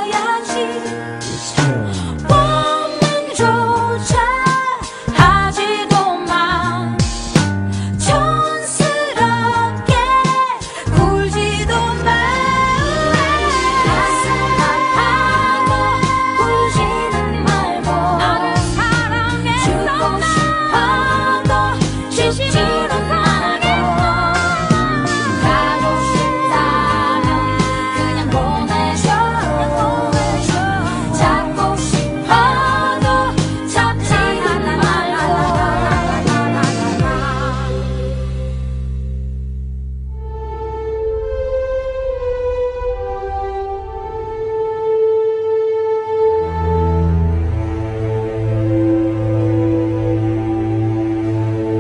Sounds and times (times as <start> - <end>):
Music: 0.0 - 51.8.